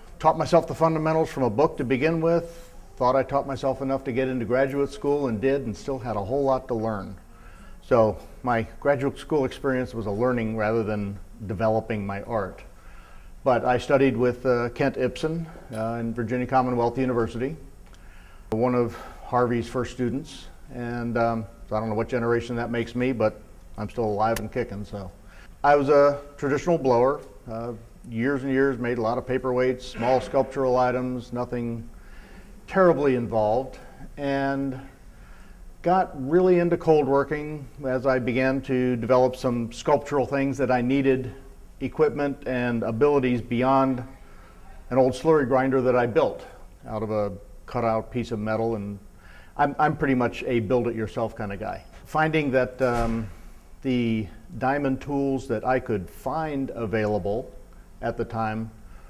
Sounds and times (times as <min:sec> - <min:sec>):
Speech: 0:00.2 - 0:07.2, 0:07.8 - 0:12.7, 0:13.4 - 0:17.7, 0:18.6 - 0:31.9, 0:32.7 - 0:35.0, 0:35.8 - 0:58.8.